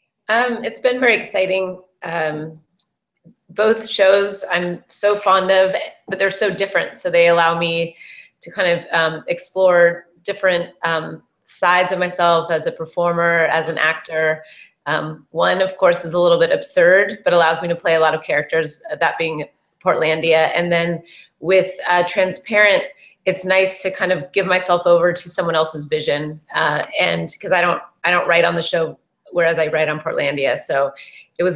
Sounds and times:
Speech: 0.3 - 2.6, 3.5 - 31.5.

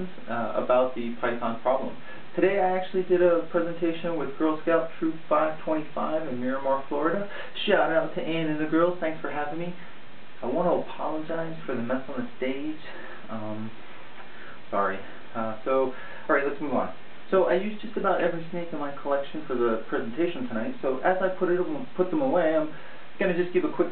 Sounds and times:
Speech: 0.0 - 9.8, 10.4 - 13.8, 14.7 - 23.9
Inside, small room: 0.0 - 23.9.

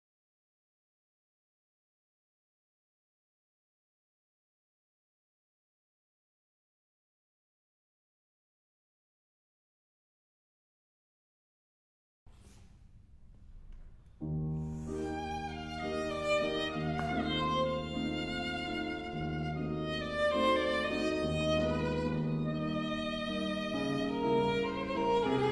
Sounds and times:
Classical music: 12.4 - 25.5
Violin, fiddle: 14.6 - 25.5.

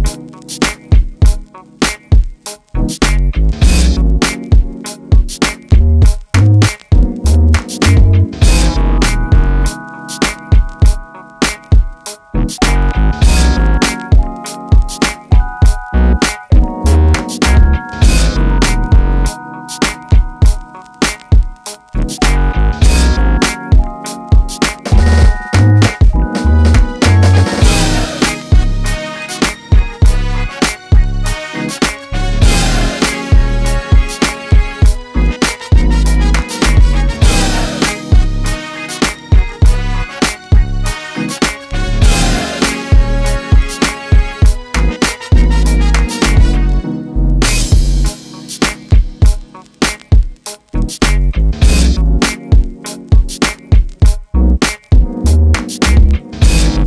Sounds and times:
Soul music: 0.0 - 56.8.

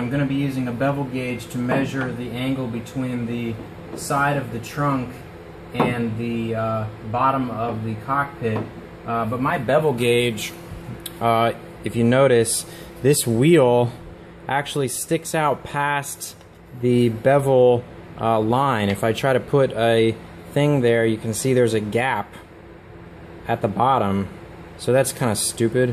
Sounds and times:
Speech: 0.0 - 22.5, 23.4 - 25.9.

